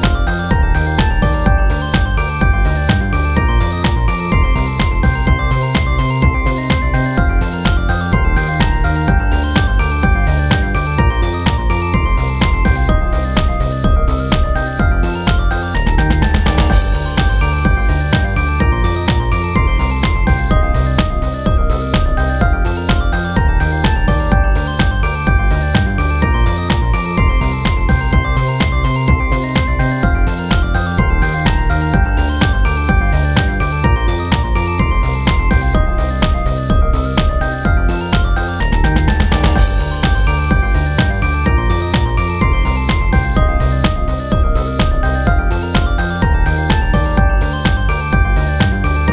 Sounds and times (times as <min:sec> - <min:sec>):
Theme music: 0:00.0 - 0:49.1.